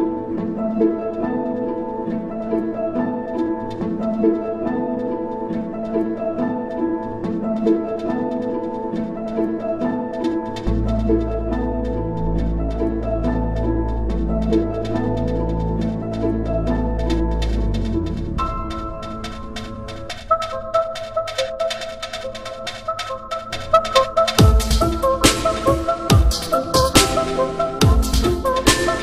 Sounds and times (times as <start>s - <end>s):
Dubstep: 23.8s - 29.0s.